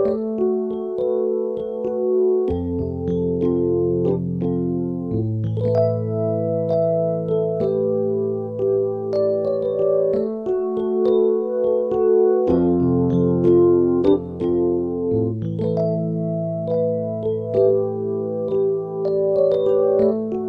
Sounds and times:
Electric piano: 0.0 - 20.4.

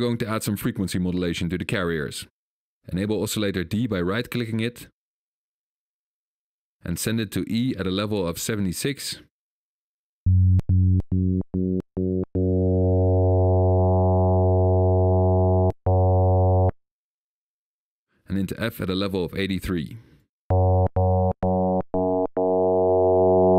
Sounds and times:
Speech: 0.0 - 2.3, 2.9 - 5.0, 6.8 - 9.3, 18.3 - 20.0
Electronic music: 10.3 - 16.8, 20.5 - 23.5
Synthesizer: 11.0 - 16.8, 20.5 - 23.5.

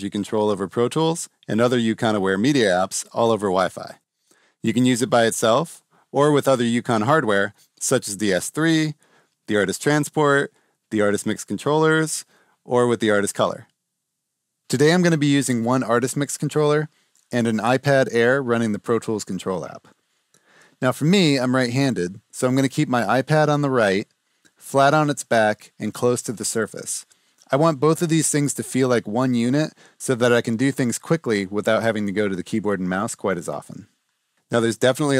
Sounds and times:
Speech: 0.0 - 4.0, 4.6 - 13.7, 14.7 - 19.9, 20.8 - 33.9, 34.5 - 35.1.

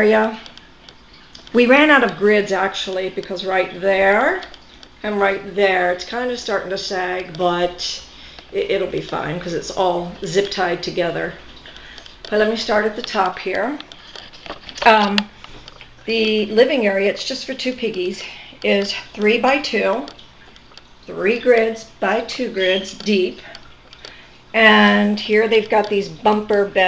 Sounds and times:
Speech: 0.0 - 0.4, 1.5 - 11.4, 12.3 - 13.8, 14.8 - 15.3, 16.1 - 20.1, 21.1 - 23.4, 24.6 - 26.8.

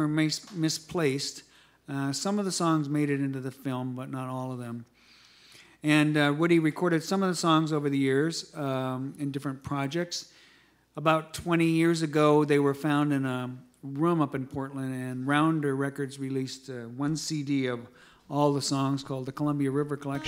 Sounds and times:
Speech: 0.0 - 4.9, 5.8 - 10.3, 11.0 - 20.2.

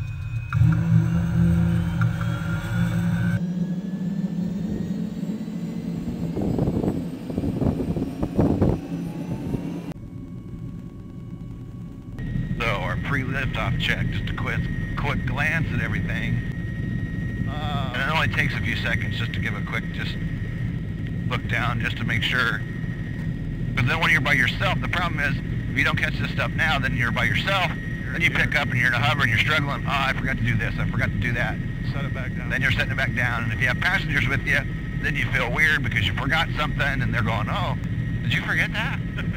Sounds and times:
Speech: 12.6 - 16.4, 17.5 - 20.2, 21.3 - 22.6, 23.8 - 39.3.

